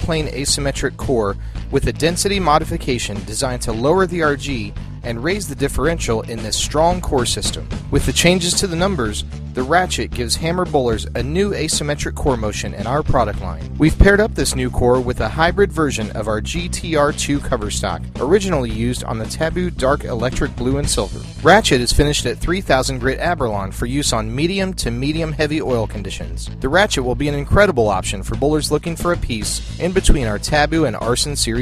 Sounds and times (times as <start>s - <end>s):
Music: 0.0s - 31.6s
Speech: 0.0s - 31.6s.